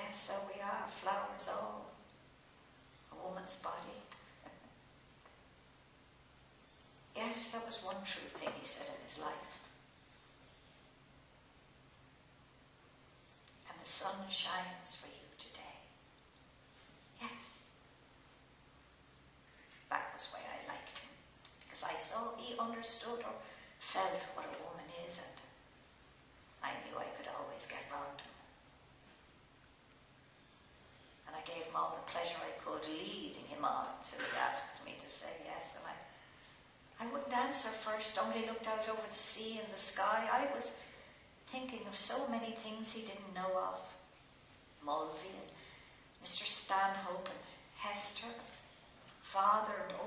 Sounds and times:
Speech: 0:00.0 - 0:02.0, 0:03.1 - 0:04.6, 0:07.2 - 0:09.6, 0:13.7 - 0:15.9, 0:17.2 - 0:17.6, 0:19.9 - 0:25.5, 0:26.6 - 0:28.4, 0:31.3 - 0:36.1, 0:37.0 - 0:40.9, 0:41.5 - 0:44.0, 0:44.8 - 0:45.6, 0:46.2 - 0:48.6, 0:49.2 - 0:50.0.

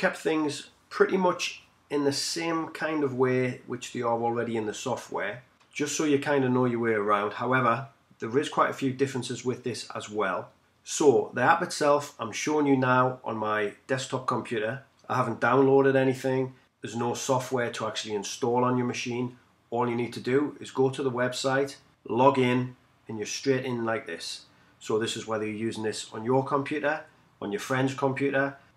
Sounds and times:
Speech: 0:00.0 - 0:28.6.

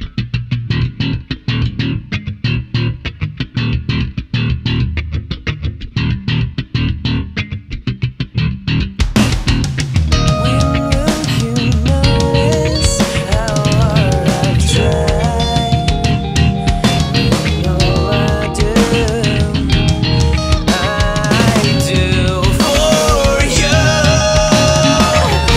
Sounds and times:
Bass guitar: 0:00.0 - 0:25.5.

